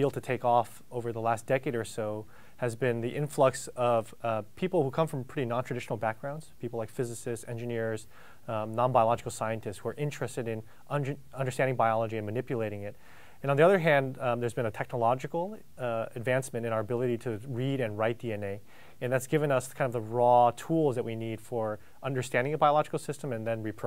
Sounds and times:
Speech: 0.0 - 23.8.

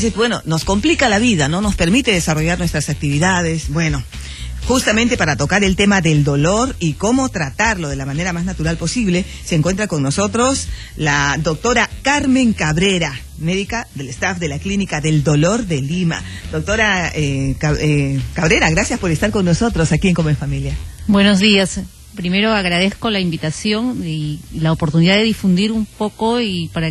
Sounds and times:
Speech: 0.0 - 26.9.

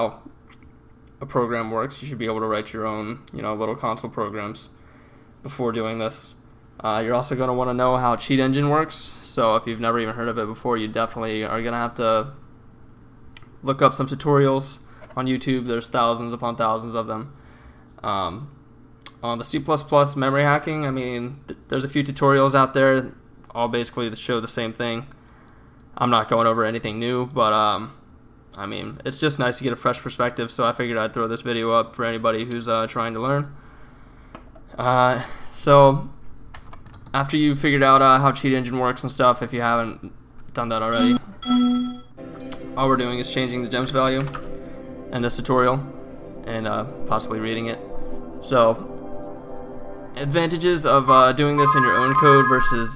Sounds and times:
Speech: 0.0 - 0.3, 1.2 - 4.8, 5.4 - 12.4, 13.6 - 17.3, 18.0 - 25.1, 26.0 - 28.0, 28.6 - 33.5, 34.7 - 36.2, 37.1 - 41.3, 42.8 - 44.3, 45.2 - 45.8, 46.5 - 47.8, 48.4 - 48.8, 50.2 - 52.9.

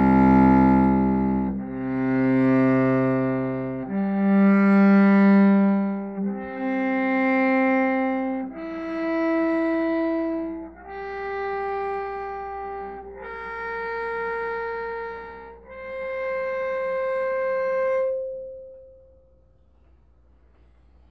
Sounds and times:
Music: 0.0 - 21.1.

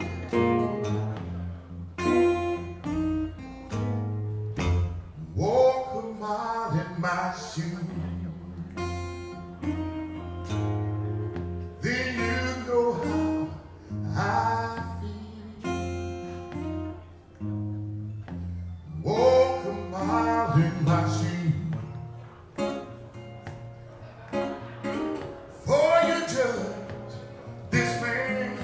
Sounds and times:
Music: 0.0 - 28.6.

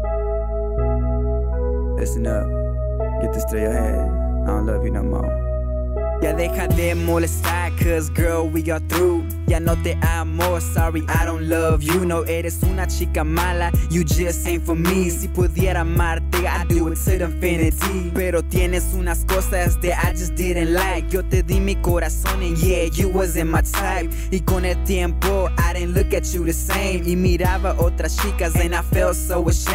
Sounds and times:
Pop music: 2.0 - 2.5, 6.0 - 29.7
Speech: 2.0 - 2.5, 3.2 - 5.3, 6.2 - 6.7.

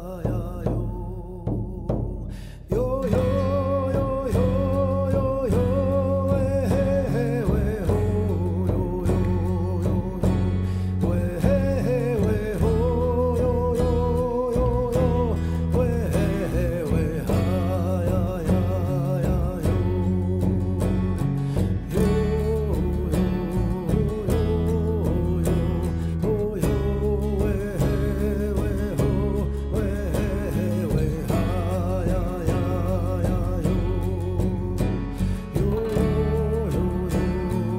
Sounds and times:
Music: 0.0 - 37.7.

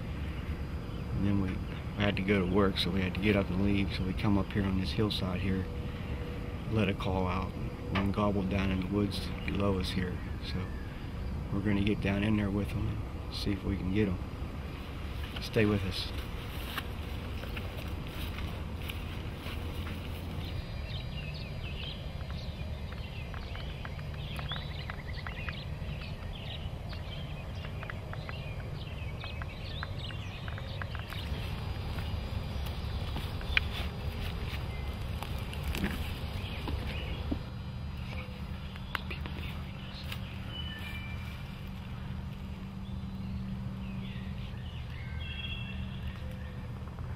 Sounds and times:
Bird: 0.0 - 42.2, 42.8 - 47.1.

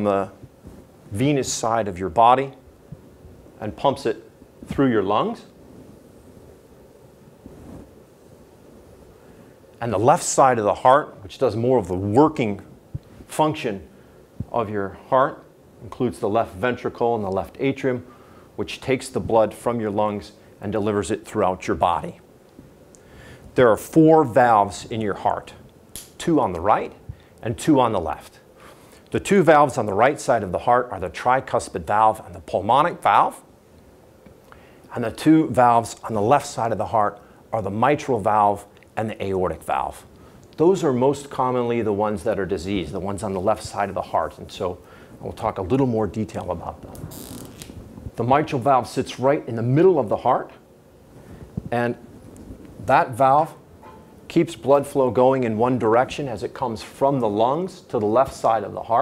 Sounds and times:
Speech: 0.0 - 0.4, 1.1 - 2.6, 3.6 - 5.5, 9.8 - 12.7, 13.3 - 13.9, 14.5 - 22.2, 23.6 - 25.6, 26.2 - 28.4, 29.1 - 33.5, 34.9 - 46.9, 48.2 - 50.6, 51.7 - 52.0, 52.9 - 53.6, 54.3 - 59.0
Inside, small room: 0.0 - 59.0.

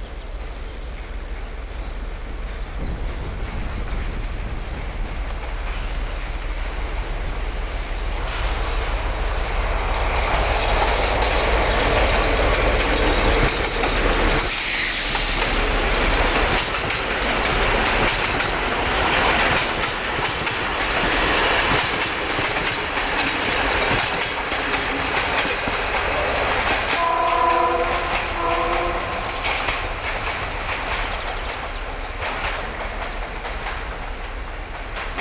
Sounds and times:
Railroad car, train wagon: 0.0 - 35.2
Train: 0.0 - 35.2.

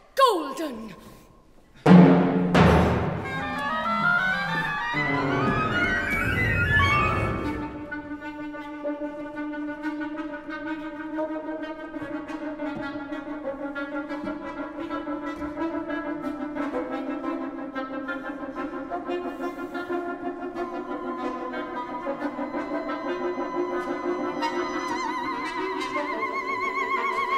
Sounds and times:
Music: 1.8 - 27.3.

